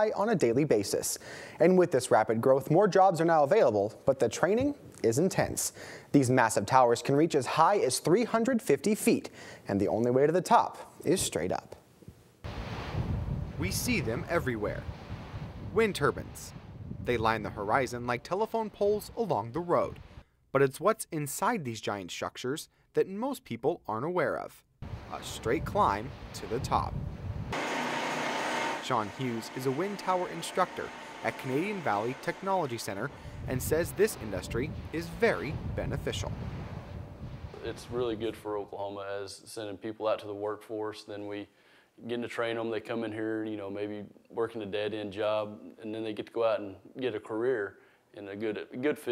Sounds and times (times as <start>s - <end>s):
Speech: 0.0s - 11.8s, 13.6s - 14.8s, 15.8s - 16.5s, 17.1s - 20.0s, 20.6s - 26.9s, 28.9s - 36.3s, 37.6s - 49.1s.